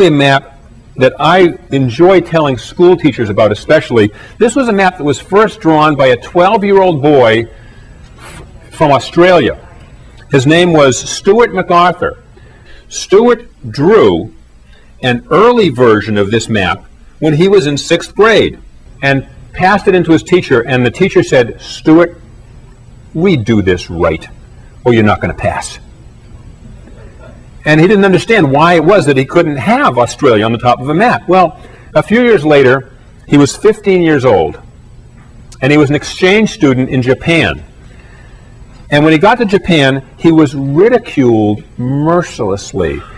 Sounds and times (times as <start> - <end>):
Speech: 0.0 - 7.5, 8.3 - 12.3, 12.9 - 14.4, 15.0 - 22.2, 23.1 - 25.9, 27.2 - 34.6, 35.6 - 37.7, 38.9 - 43.1.